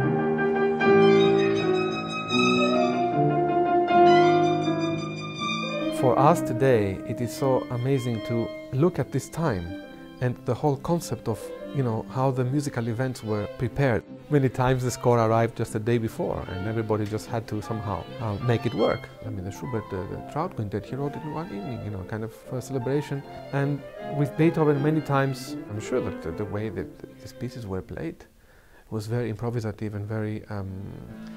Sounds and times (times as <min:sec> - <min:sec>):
Violin, fiddle: 0:00.4 - 0:28.2, 0:30.7 - 0:31.3
Speech: 0:05.8 - 0:28.3, 0:28.9 - 0:31.2.